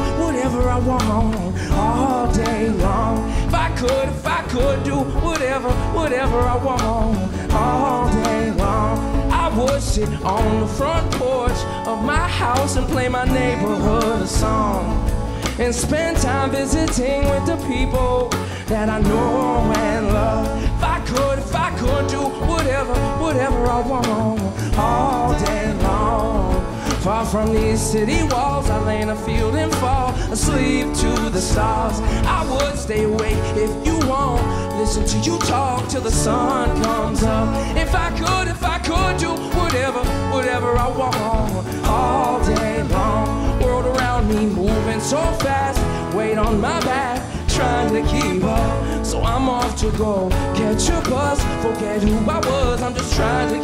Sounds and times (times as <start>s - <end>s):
Music: 0.0s - 53.6s.